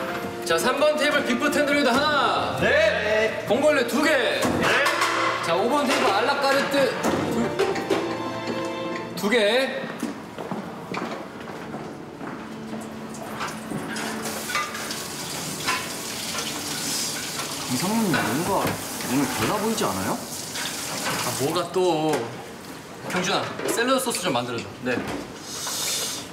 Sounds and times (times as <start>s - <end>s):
Inside, large room or hall: 0.0s - 26.3s.